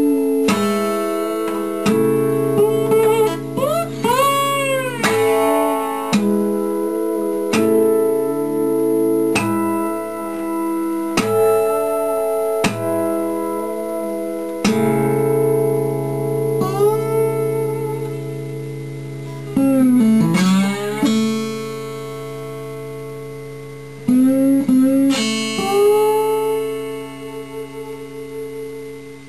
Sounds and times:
Acoustic guitar: 0:00.0 - 0:29.2.

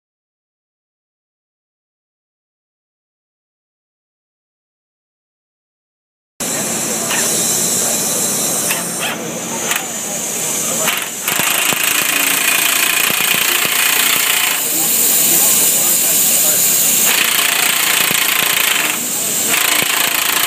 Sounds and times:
Speech: 0:06.4 - 0:20.4.

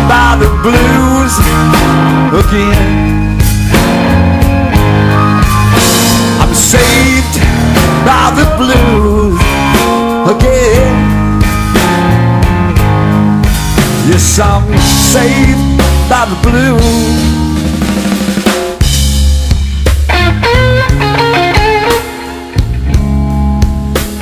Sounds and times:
Blues: 0:00.0 - 0:24.2.

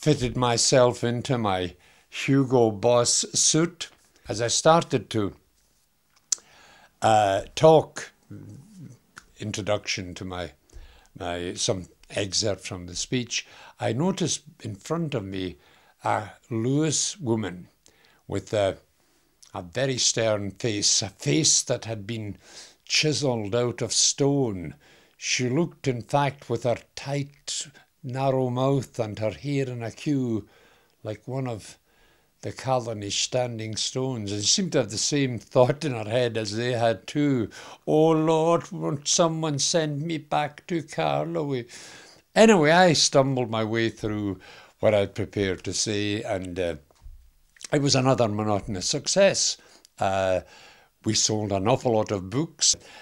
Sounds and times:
Speech: 0:00.0 - 0:05.4, 0:07.0 - 0:10.6, 0:11.2 - 0:18.9, 0:19.5 - 0:31.8, 0:32.4 - 0:41.7, 0:42.4 - 0:46.9, 0:47.6 - 0:52.8.

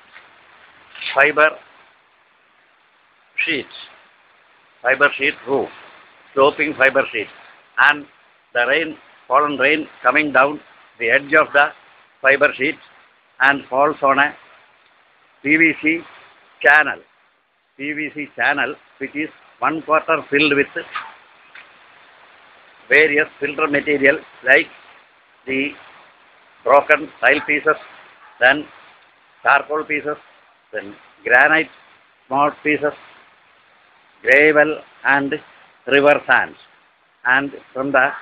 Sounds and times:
Speech: 0:01.0 - 0:01.6, 0:03.4 - 0:03.9, 0:04.8 - 0:05.7, 0:06.4 - 0:12.8, 0:13.4 - 0:14.4, 0:15.5 - 0:17.0, 0:17.8 - 0:21.0, 0:22.9 - 0:24.7, 0:25.5 - 0:25.8, 0:26.6 - 0:28.7, 0:29.4 - 0:30.2, 0:30.8 - 0:31.7, 0:32.3 - 0:33.0, 0:34.2 - 0:38.2.

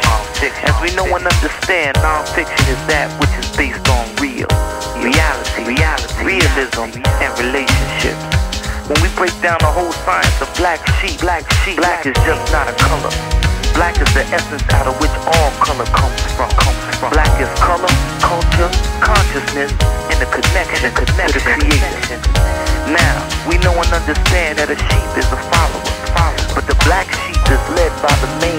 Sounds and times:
Music: 0:00.0 - 0:28.5.

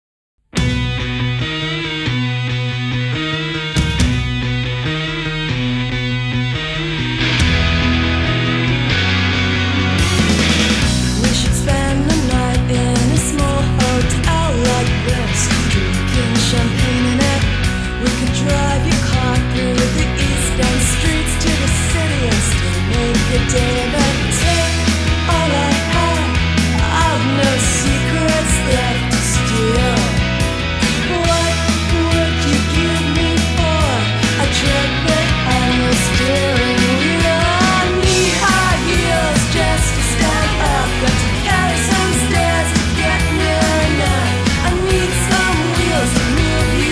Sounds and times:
Progressive rock: 0:00.5 - 0:46.9.

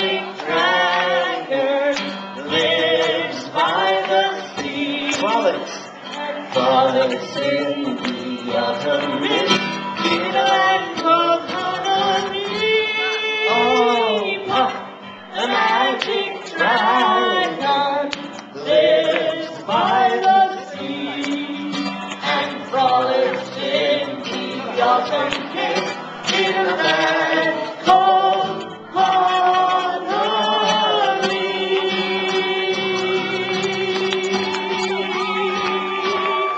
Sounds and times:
Male singing: 0:00.0 - 0:36.5
Musical instrument: 0:00.0 - 0:36.5.

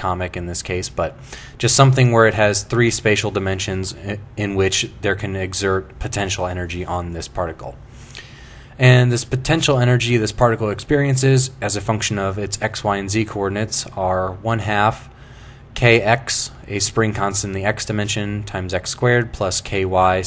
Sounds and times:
Speech: 0:00.0 - 0:07.8, 0:08.8 - 0:15.1, 0:15.8 - 0:20.2.

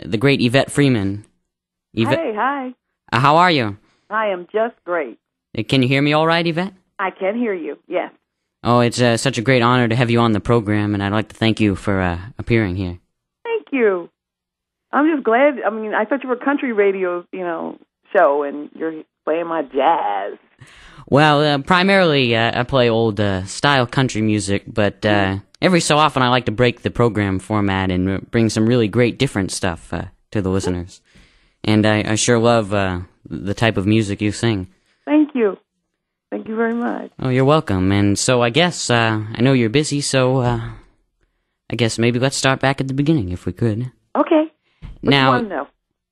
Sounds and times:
Speech: 0:00.0 - 0:01.3, 0:02.0 - 0:08.1, 0:08.7 - 0:14.1, 0:15.0 - 0:31.0, 0:31.7 - 0:35.6, 0:36.4 - 0:40.8, 0:41.7 - 0:44.5, 0:45.1 - 0:45.7.

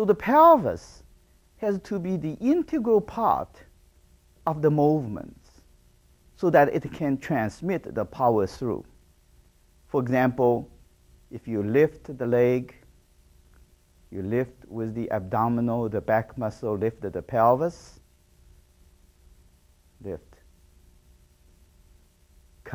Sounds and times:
Speech: 0:00.0 - 0:01.0, 0:01.6 - 0:03.7, 0:04.4 - 0:05.6, 0:06.4 - 0:08.9, 0:09.9 - 0:10.7, 0:11.3 - 0:12.8, 0:14.1 - 0:18.0, 0:20.0 - 0:20.4.

